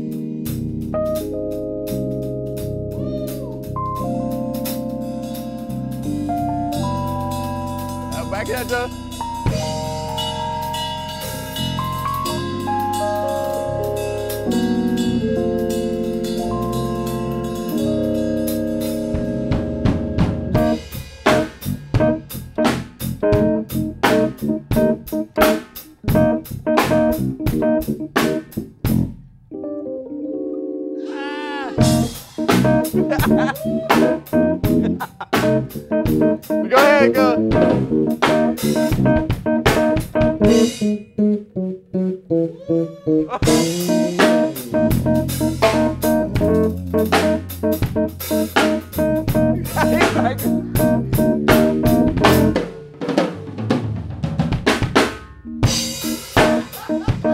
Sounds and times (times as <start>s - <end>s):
Funk: 0.0s - 29.3s, 31.0s - 57.3s
Bass guitar: 0.0s - 29.8s, 31.6s - 57.3s.